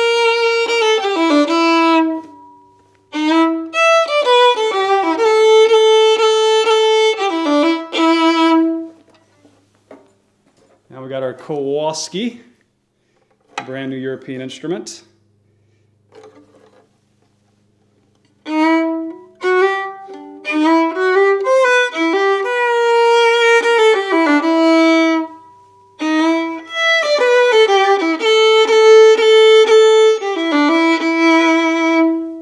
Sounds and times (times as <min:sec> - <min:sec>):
Violin, fiddle: 0:00.0 - 0:02.4, 0:03.1 - 0:09.1, 0:18.4 - 0:25.4, 0:26.0 - 0:32.4.